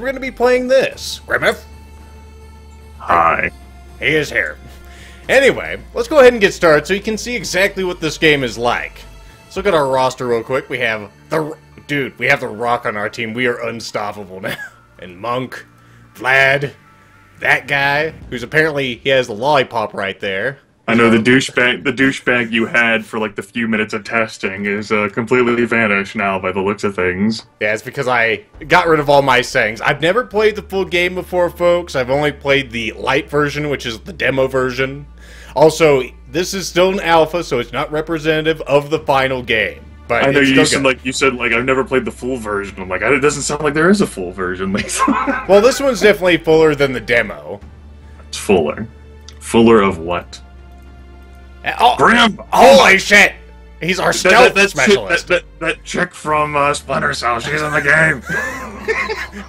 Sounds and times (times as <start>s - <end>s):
Speech: 0.0s - 1.7s, 3.0s - 4.6s, 5.3s - 16.8s, 17.4s - 47.6s, 48.3s - 50.4s, 51.6s - 58.9s
Music: 0.0s - 59.4s.